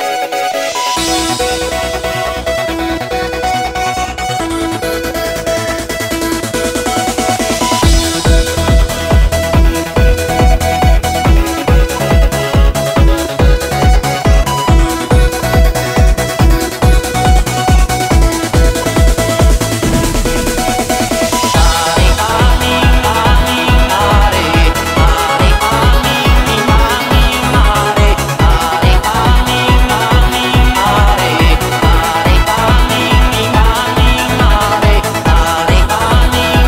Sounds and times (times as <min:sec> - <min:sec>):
Music: 0:00.0 - 0:36.6.